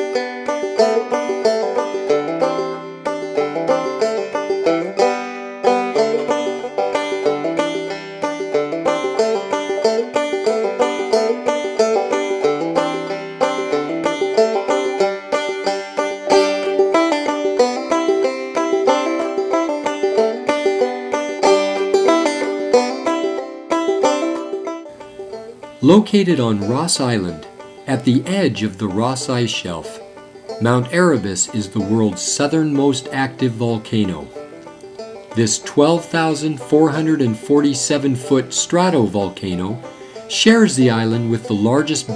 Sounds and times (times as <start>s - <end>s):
Music: 0.0s - 42.1s.